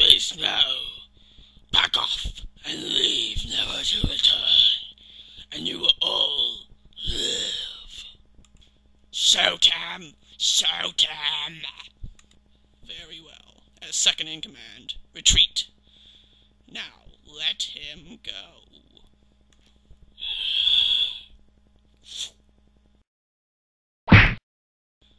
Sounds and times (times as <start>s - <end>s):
Speech: 0.0s - 1.1s, 1.7s - 4.9s, 5.5s - 8.1s, 9.1s - 12.0s, 12.8s - 15.8s, 16.7s - 19.1s.